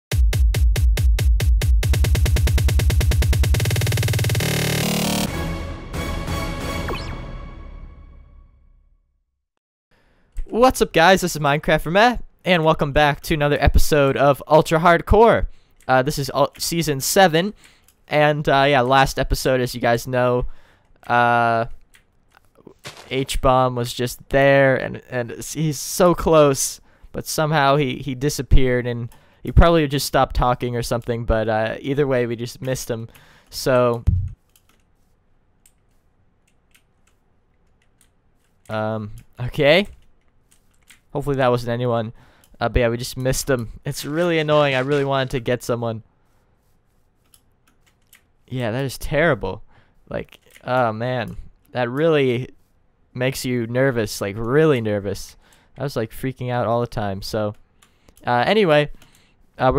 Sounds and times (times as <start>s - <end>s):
Drum machine: 0.1s - 5.4s, 34.0s - 34.4s.